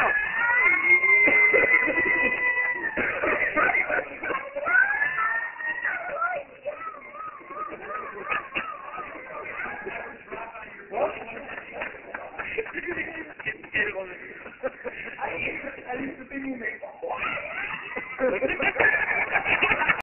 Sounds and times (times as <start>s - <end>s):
Speech: 3.4s - 17.6s.